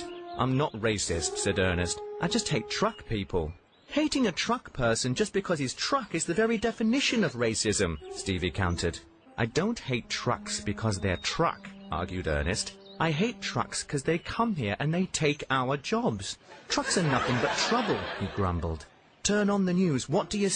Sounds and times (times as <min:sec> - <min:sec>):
Speech: 0:00.0 - 0:20.5.